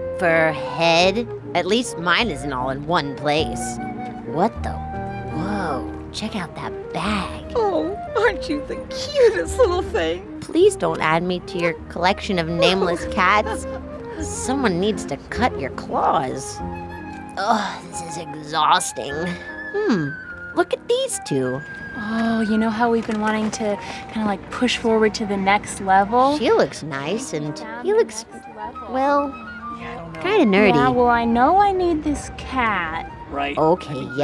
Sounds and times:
Music: 0:00.0 - 0:34.2.

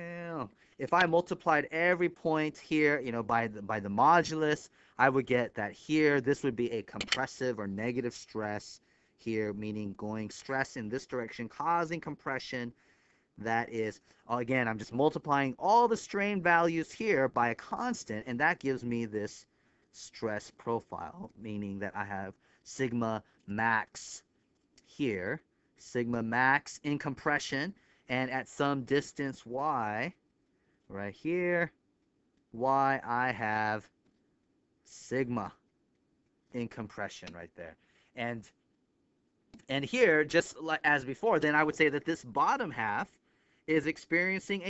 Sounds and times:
Speech: 0:00.0 - 0:12.8, 0:13.4 - 0:30.2, 0:30.9 - 0:31.8, 0:32.6 - 0:33.9, 0:34.9 - 0:35.6, 0:36.6 - 0:38.5, 0:39.6 - 0:43.1, 0:43.7 - 0:44.7.

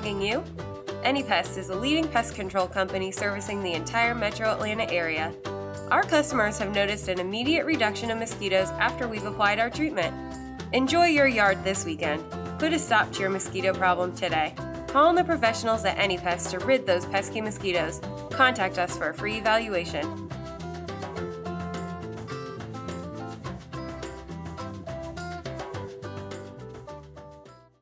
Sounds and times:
Speech: 0:00.0 - 0:20.2
Music: 0:00.0 - 0:27.8.

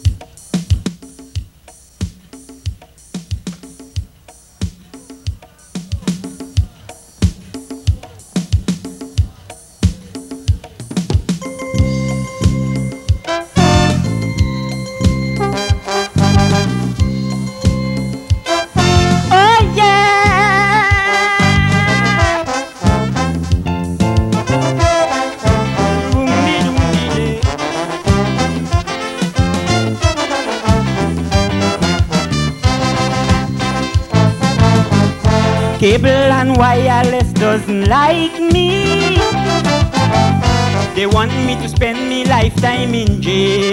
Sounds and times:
Blues: 0:00.0 - 0:43.7.

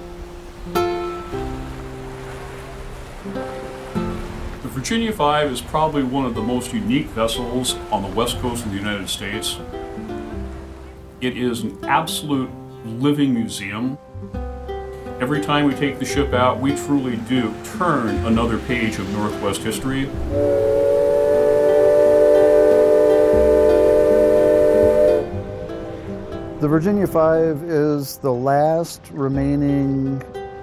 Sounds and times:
Music: 0:00.0 - 0:30.6
Speech: 0:04.6 - 0:09.6, 0:11.2 - 0:14.0, 0:15.2 - 0:20.1, 0:26.6 - 0:30.2.

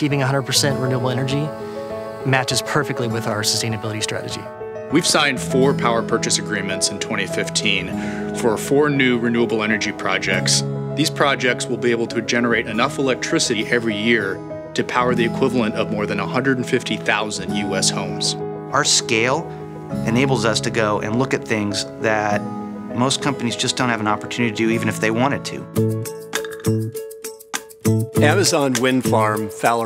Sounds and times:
Speech: 0:00.0 - 0:01.5, 0:02.3 - 0:19.4, 0:20.0 - 0:22.4, 0:23.0 - 0:25.7, 0:28.2 - 0:29.8
Music: 0:00.0 - 0:29.8.

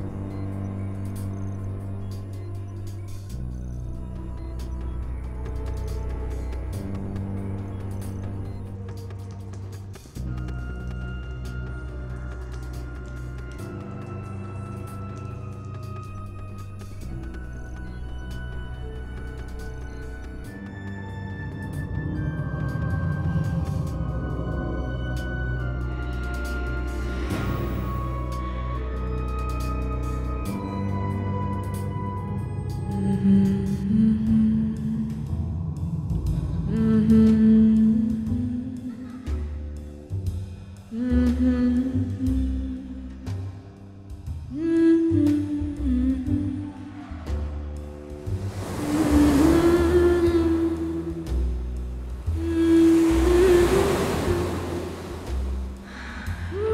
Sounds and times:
Music: 0:00.0 - 0:56.7.

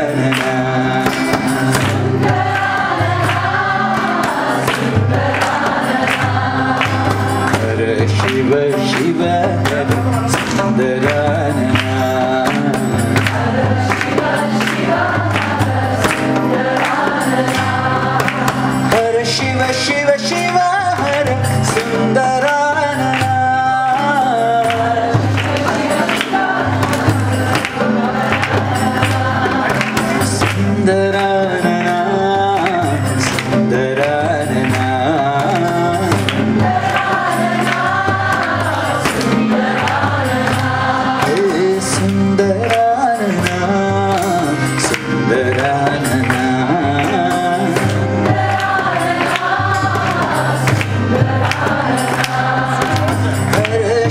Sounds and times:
Male singing: 0:00.0 - 0:01.5, 0:07.5 - 0:13.2, 0:18.9 - 0:26.1, 0:30.3 - 0:36.5, 0:41.2 - 0:48.2, 0:53.4 - 0:54.1
Music: 0:00.0 - 0:54.1.

